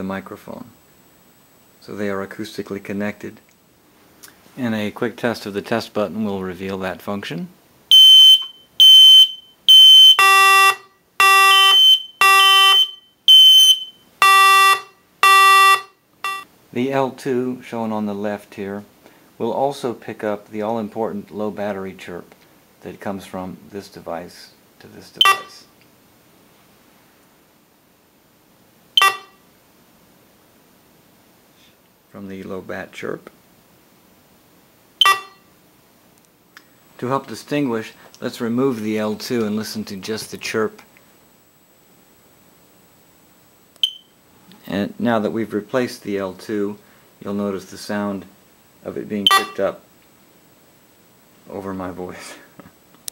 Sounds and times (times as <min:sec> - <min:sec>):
Speech: 0:00.0 - 0:00.8, 0:01.8 - 0:03.5, 0:04.6 - 0:07.6, 0:16.7 - 0:25.8, 0:32.1 - 0:33.4, 0:37.0 - 0:40.9, 0:44.5 - 0:49.9, 0:51.4 - 0:52.6
Smoke detector, smoke alarm: 0:07.9 - 0:16.5, 0:25.2 - 0:25.6, 0:29.0 - 0:29.4, 0:35.0 - 0:35.5, 0:43.8 - 0:44.2, 0:49.3 - 0:49.6
Beep, bleep: 0:08.0 - 0:16.4, 0:25.2 - 0:25.5, 0:29.0 - 0:29.4, 0:35.0 - 0:35.4, 0:43.8 - 0:44.1, 0:49.3 - 0:49.6.